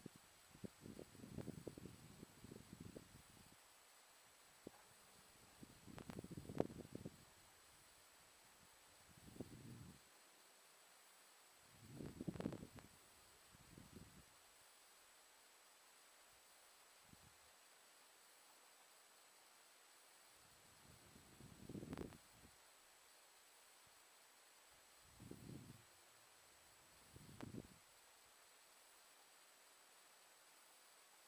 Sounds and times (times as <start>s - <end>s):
Silence: 0.0s - 31.2s.